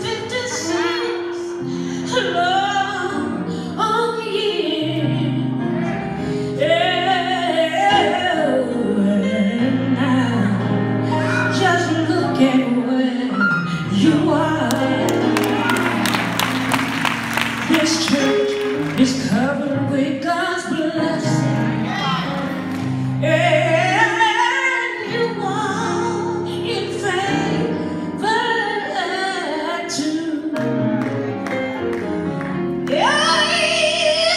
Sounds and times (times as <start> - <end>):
Music: 0.0 - 34.3.